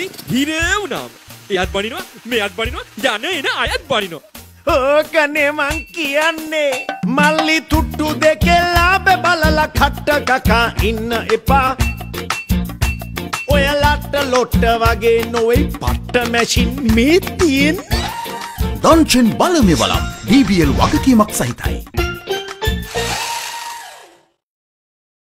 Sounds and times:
Speech: 0:00.0 - 0:06.5, 0:18.8 - 0:21.8
Music: 0:00.0 - 0:23.4.

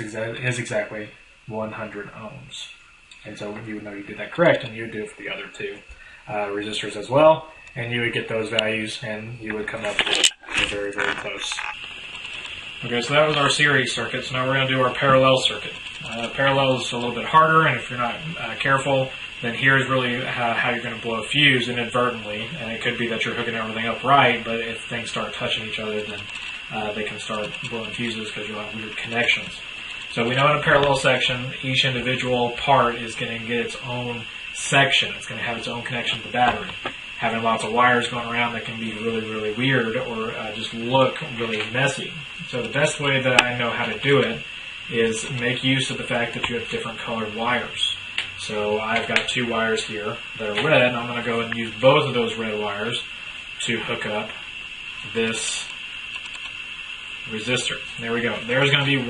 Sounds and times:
Speech: 0:00.0 - 0:11.8, 0:12.8 - 0:54.4, 0:55.1 - 0:55.8, 0:57.3 - 0:59.1
Inside, small room: 0:00.0 - 0:59.1.

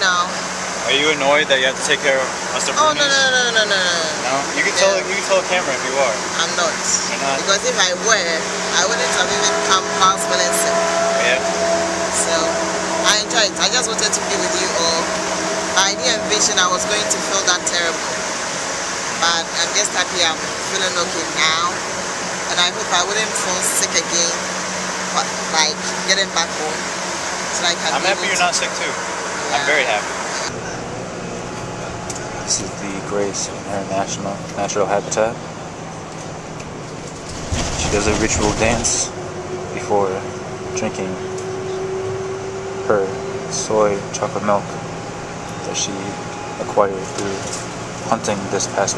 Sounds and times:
Speech: 0:00.0 - 0:11.4, 0:12.2 - 0:12.5, 0:13.1 - 0:15.2, 0:15.8 - 0:18.2, 0:19.2 - 0:21.8, 0:22.5 - 0:24.4, 0:25.2 - 0:26.8, 0:27.6 - 0:30.8, 0:32.1 - 0:35.4, 0:37.8 - 0:39.1, 0:39.8 - 0:41.2, 0:42.8 - 0:44.8, 0:45.6 - 0:48.9
Outside, urban or manmade: 0:00.0 - 0:48.9.

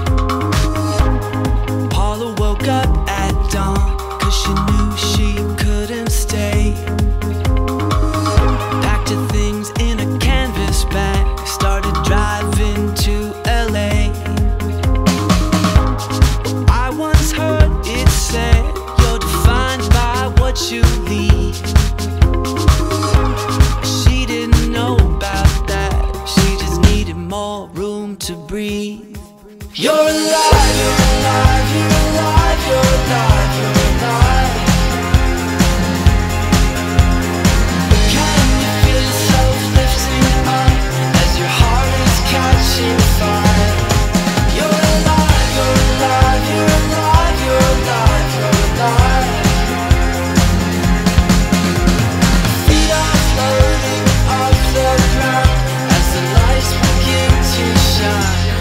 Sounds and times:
Music: 0:00.0 - 0:58.6.

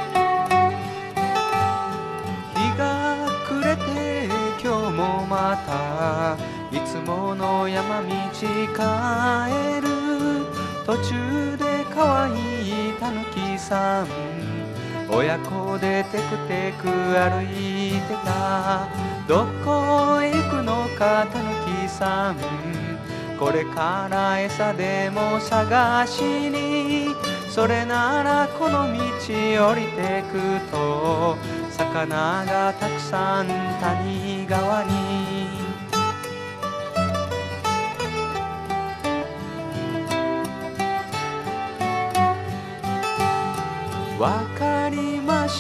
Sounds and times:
Music: 0:00.0 - 0:45.6.

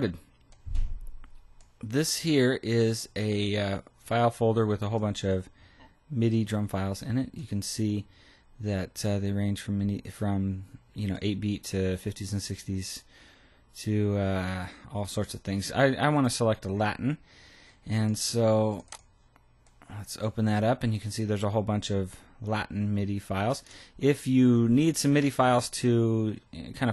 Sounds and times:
Speech: 0:00.0 - 0:00.3, 0:01.8 - 0:13.1, 0:13.8 - 0:17.2, 0:17.9 - 0:18.9, 0:19.8 - 0:26.9.

